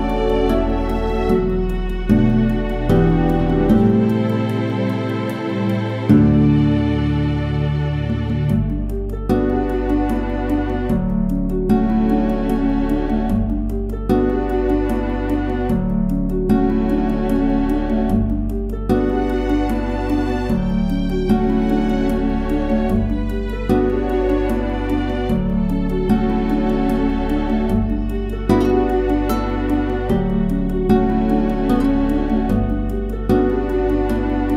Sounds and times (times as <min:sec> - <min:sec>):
Sad music: 0:00.0 - 0:34.5.